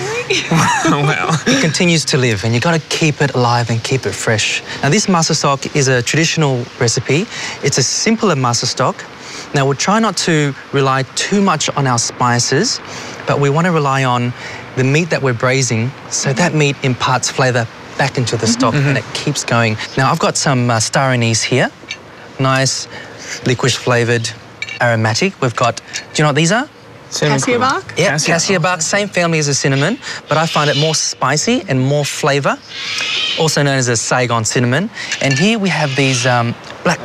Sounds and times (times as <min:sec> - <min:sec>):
Speech: 0:00.0 - 0:21.8, 0:22.4 - 0:32.6, 0:33.4 - 0:37.0.